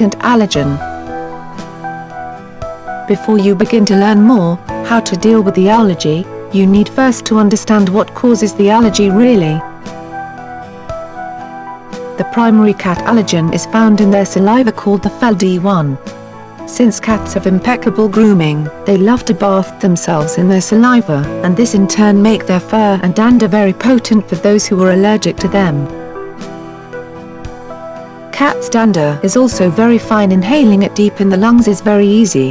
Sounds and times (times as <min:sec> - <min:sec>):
Speech: 0:00.0 - 0:00.8, 0:03.1 - 0:09.6, 0:12.2 - 0:16.0, 0:16.7 - 0:25.9, 0:28.4 - 0:32.5
Music: 0:00.0 - 0:32.5.